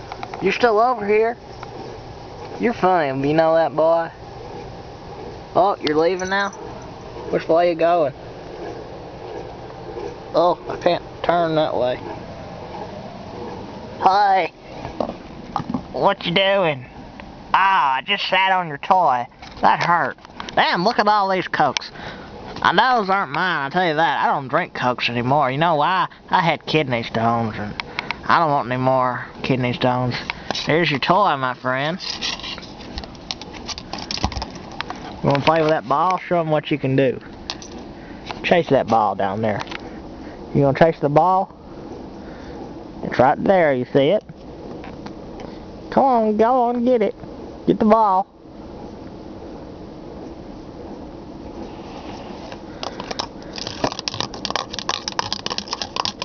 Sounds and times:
Speech: 0.4s - 1.4s, 2.6s - 4.2s, 5.6s - 6.6s, 7.3s - 8.2s, 10.4s - 12.0s, 14.0s - 14.6s, 16.0s - 16.9s, 17.6s - 22.0s, 22.6s - 32.2s, 35.2s - 37.3s, 38.4s - 39.7s, 40.6s - 41.5s, 43.0s - 44.3s, 45.9s - 48.3s.

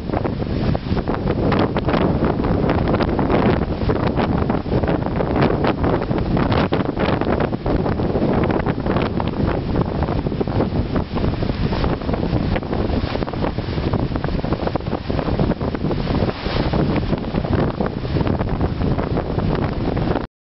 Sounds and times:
Waves, surf: 0.0s - 20.3s.

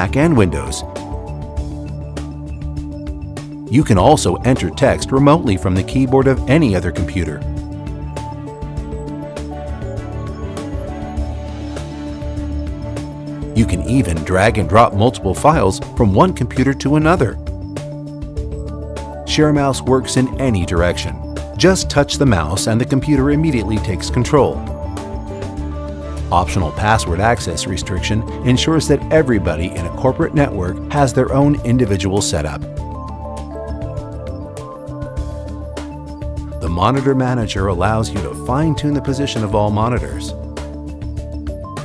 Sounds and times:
Speech: 0.0s - 0.9s, 3.7s - 7.4s, 13.6s - 17.4s, 19.3s - 24.7s, 26.3s - 32.6s, 36.6s - 40.4s
Music: 0.0s - 41.8s.

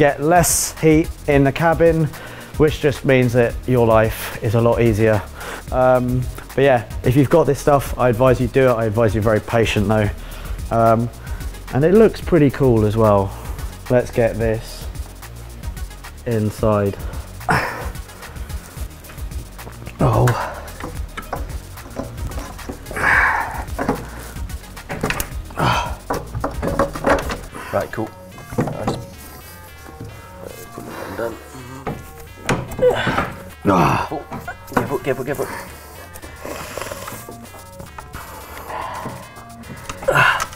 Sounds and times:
Music: 0.0s - 40.5s.

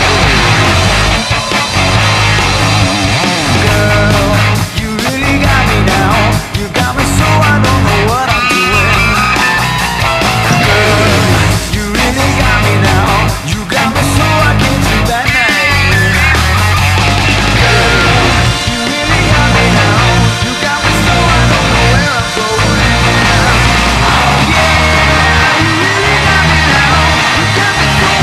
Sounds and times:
Bass guitar: 0.0s - 28.2s.

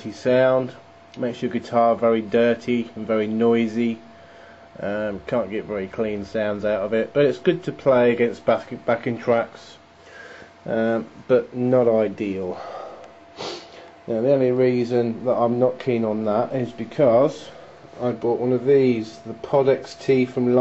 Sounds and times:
Speech: 0.0s - 4.1s, 4.8s - 9.8s, 10.7s - 12.7s, 14.1s - 20.6s.

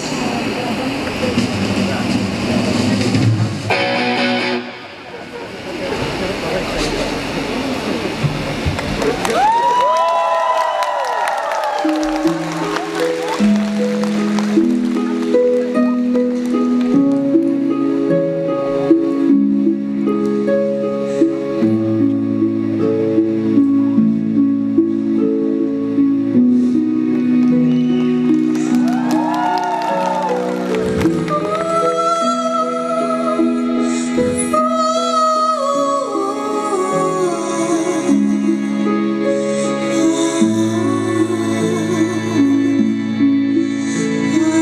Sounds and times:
Music: 0.0s - 5.2s, 9.9s - 44.6s.

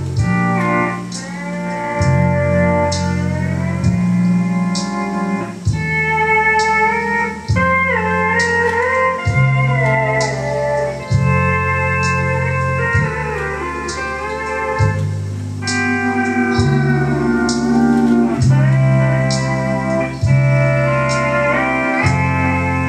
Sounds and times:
Hammond organ: 0.0s - 22.8s.

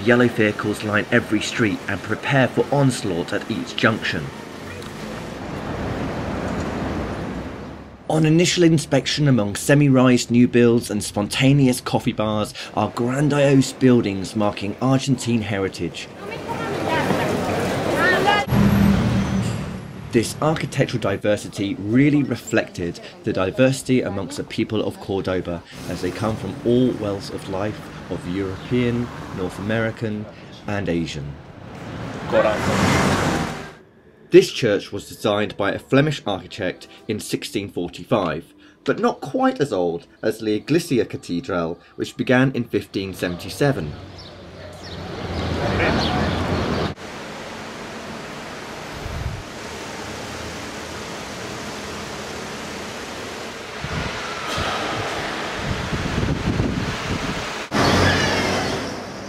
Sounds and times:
Wind noise (microphone): 49.0s - 49.4s, 53.8s - 57.5s.

